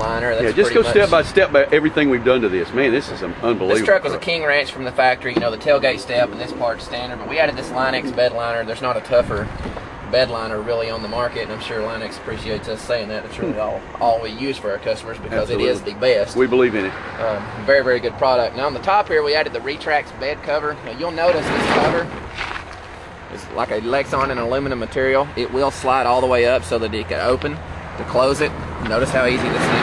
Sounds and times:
Speech: 0.0s - 9.5s, 10.1s - 22.2s, 23.3s - 29.8s.

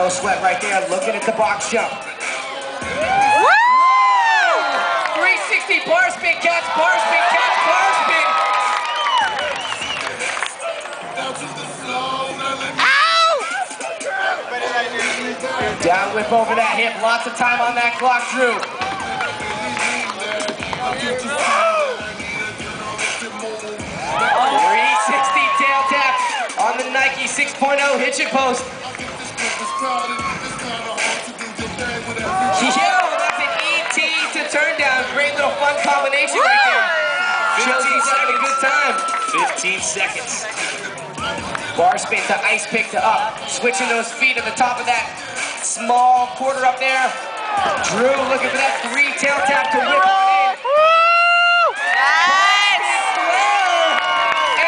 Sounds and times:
Music: 0.0s - 54.6s.

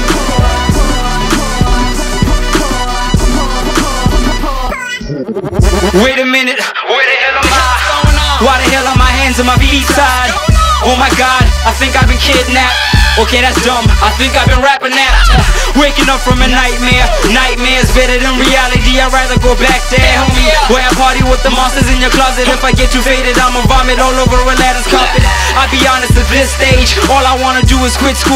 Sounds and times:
Music: 0.0s - 28.3s.

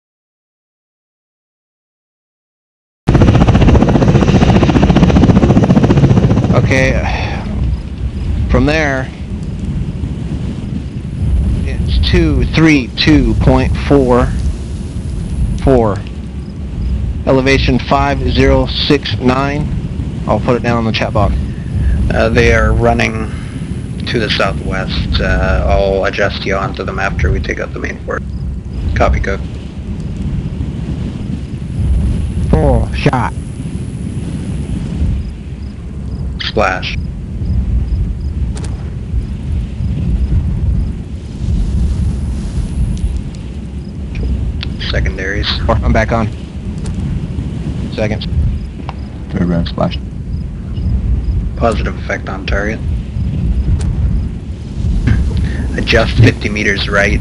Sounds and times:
Speech: 6.5s - 7.6s, 8.5s - 9.2s, 11.7s - 14.4s, 15.6s - 16.1s, 17.3s - 19.7s, 20.3s - 21.4s, 22.0s - 23.4s, 24.0s - 28.2s, 29.0s - 29.4s, 32.5s - 33.4s, 36.4s - 37.0s, 44.6s - 46.4s, 47.9s - 48.3s, 49.3s - 50.0s, 51.6s - 52.8s, 55.1s - 57.2s.

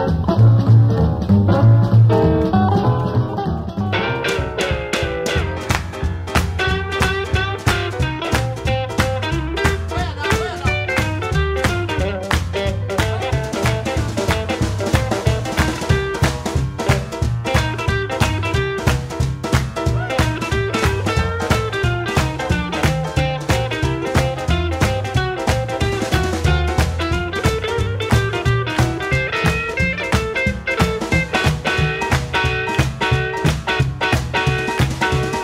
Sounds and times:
Strum: 0.0s - 35.4s
Speech: 9.8s - 11.1s.

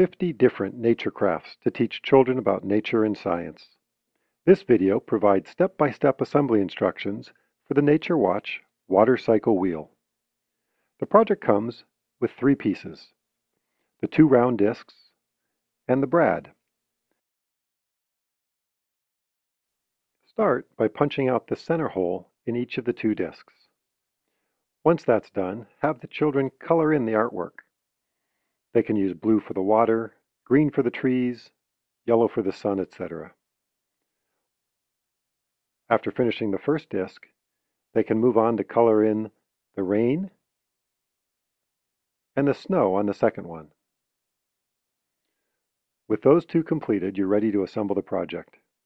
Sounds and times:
Speech: 0.0s - 3.8s, 4.5s - 10.0s, 11.0s - 13.2s, 14.0s - 15.1s, 15.9s - 16.6s, 20.3s - 23.6s, 24.9s - 27.6s, 28.8s - 33.4s, 35.9s - 37.3s, 38.0s - 40.4s, 42.4s - 43.8s, 46.1s - 48.6s.

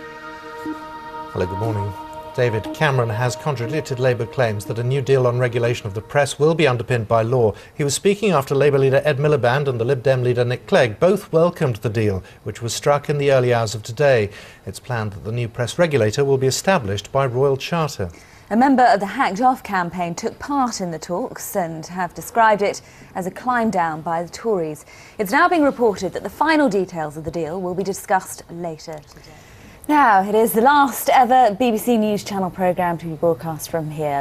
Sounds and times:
Music: 0.0s - 7.4s
Speech: 1.4s - 29.1s, 29.9s - 34.2s.

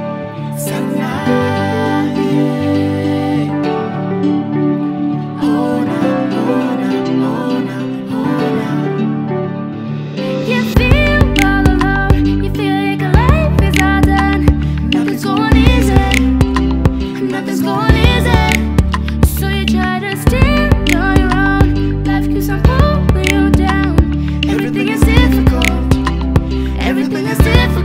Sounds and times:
Music: 0.0s - 27.8s.

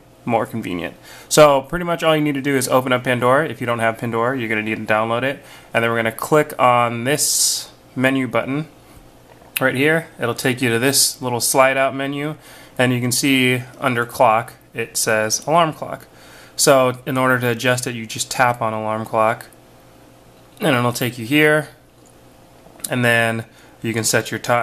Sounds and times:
Speech: 0.2s - 8.7s, 9.6s - 19.6s, 20.6s - 21.8s, 22.8s - 24.6s.

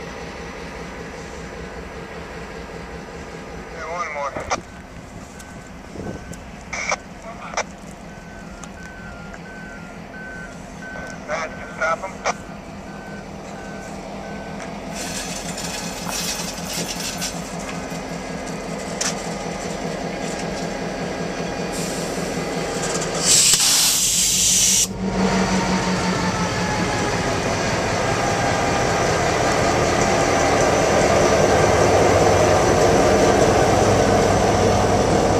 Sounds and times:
Outside, urban or manmade: 0.0s - 35.3s
Railroad car, train wagon: 0.0s - 35.3s
Train: 0.0s - 35.3s
Speech: 3.7s - 4.6s, 11.2s - 12.3s.

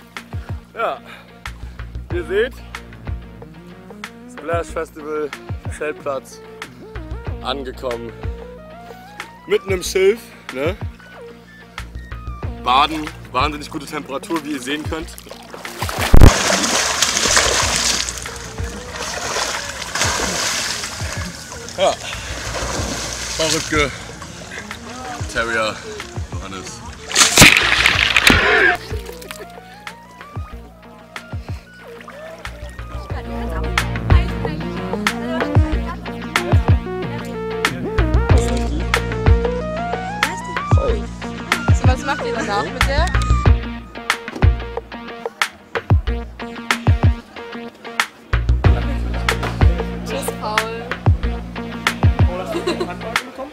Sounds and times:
Music: 0.0s - 53.5s
Water: 12.9s - 34.2s
Splash, splatter: 15.1s - 23.9s, 27.1s - 29.5s.

